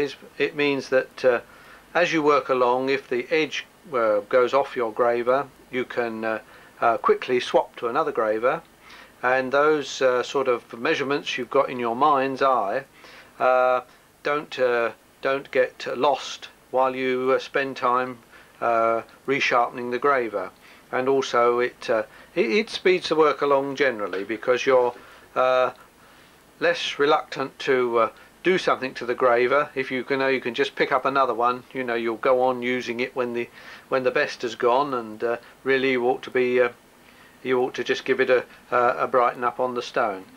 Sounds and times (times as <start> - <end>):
Speech: 0.0 - 25.8, 26.6 - 36.8, 37.4 - 40.3.